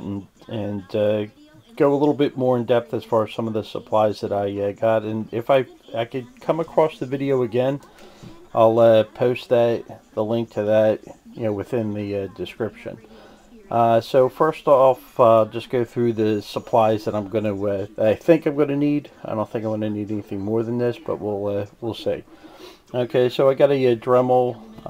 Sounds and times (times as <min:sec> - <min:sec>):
Speech: 0:00.0 - 0:22.2, 0:22.9 - 0:24.8.